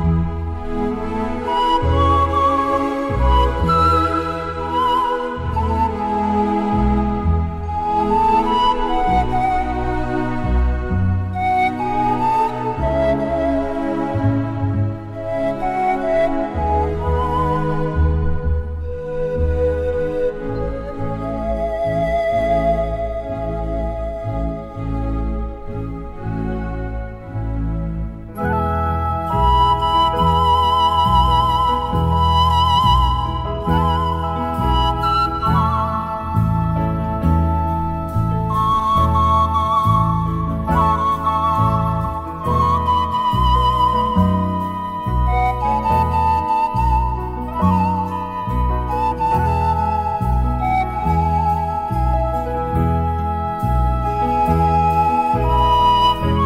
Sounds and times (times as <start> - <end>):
Flute: 0.0 - 56.4.